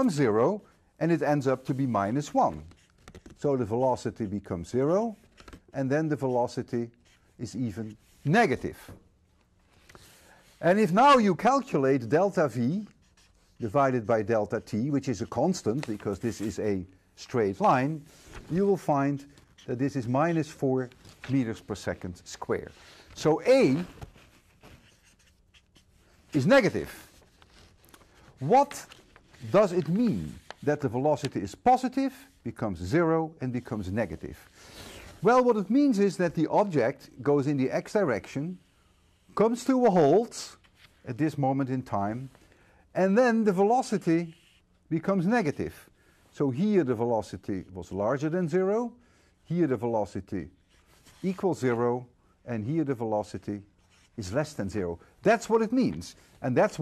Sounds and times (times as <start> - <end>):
Writing: 6.1 - 8.6, 12.4 - 14.0, 23.5 - 27.7, 44.3 - 44.7.